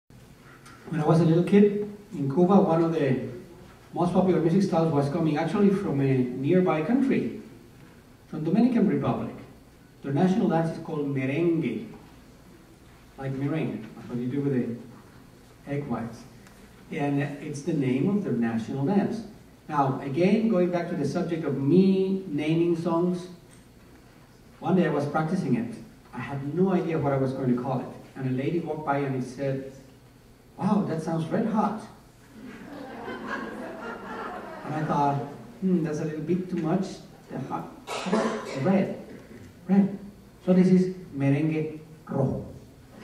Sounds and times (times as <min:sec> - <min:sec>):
Male speech, man speaking: 0:00.9 - 0:03.4, 0:04.0 - 0:07.4, 0:08.3 - 0:11.9, 0:13.2 - 0:14.8, 0:15.6 - 0:16.3, 0:16.9 - 0:23.4, 0:24.6 - 0:29.8, 0:30.6 - 0:32.0, 0:34.7 - 0:42.6.